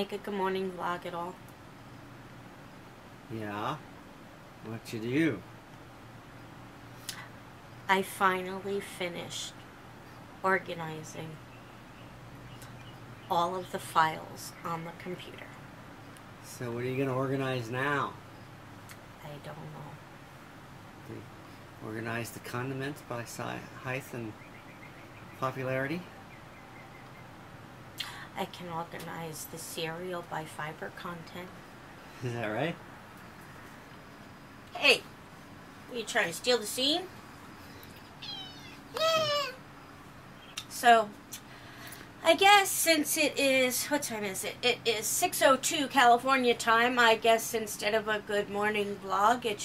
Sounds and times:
Inside, small room: 25.3 - 49.6
Cat: 38.2 - 39.6.

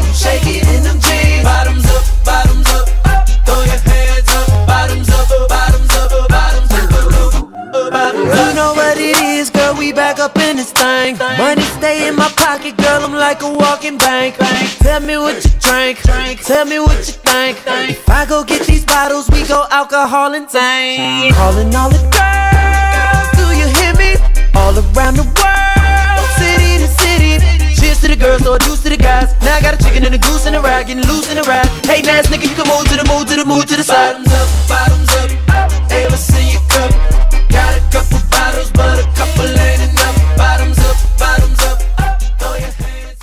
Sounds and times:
Music: 0.0 - 43.2.

